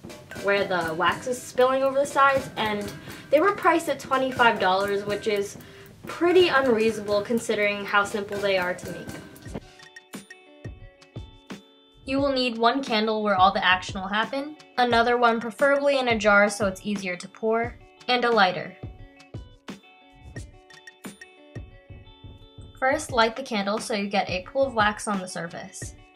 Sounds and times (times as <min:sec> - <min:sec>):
Music: 0:00.0 - 0:26.1
Speech: 0:00.4 - 0:09.2, 0:12.1 - 0:18.8, 0:22.8 - 0:25.9.